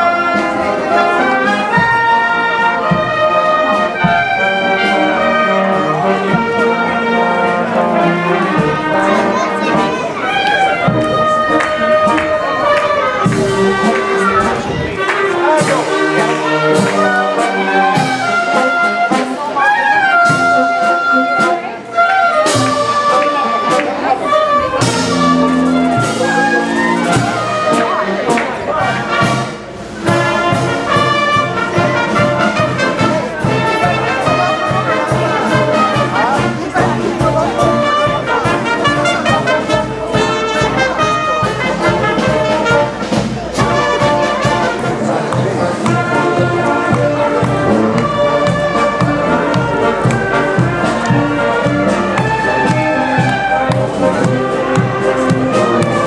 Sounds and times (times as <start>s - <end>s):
Wind instrument, woodwind instrument: 0.0s - 56.0s.